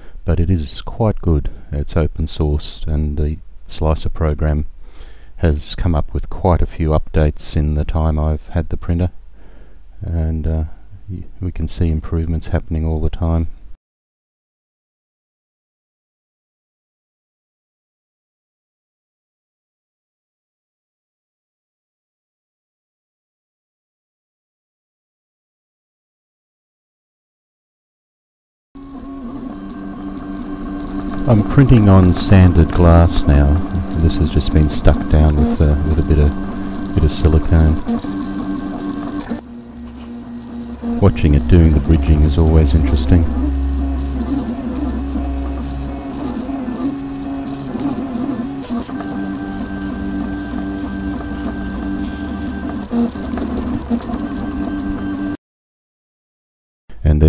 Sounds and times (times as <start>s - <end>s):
Printer: 28.8s - 55.4s.